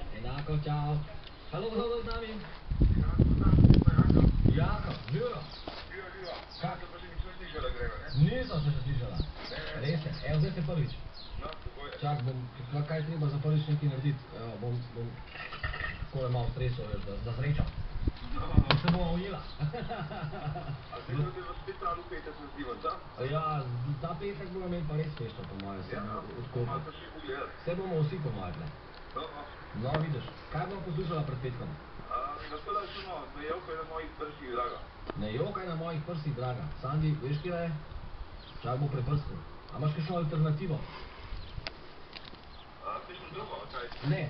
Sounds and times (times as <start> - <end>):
Speech: 0.0 - 15.2, 16.1 - 19.5, 20.9 - 37.8, 42.8 - 44.2.